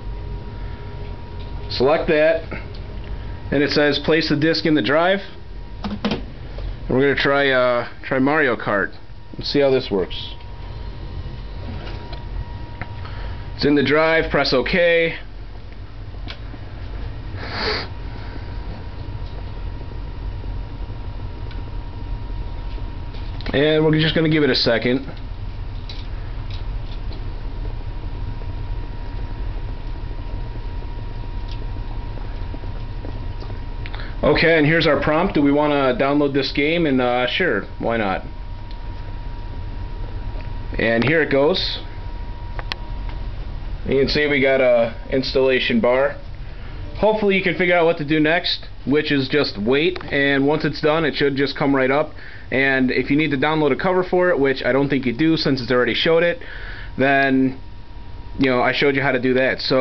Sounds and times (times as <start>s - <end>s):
Speech: 1.7s - 2.7s, 3.5s - 5.4s, 6.9s - 10.4s, 13.6s - 15.3s, 23.4s - 25.2s, 34.2s - 38.3s, 40.8s - 41.9s, 43.9s - 46.2s, 47.0s - 56.4s, 57.0s - 57.6s, 58.4s - 59.8s.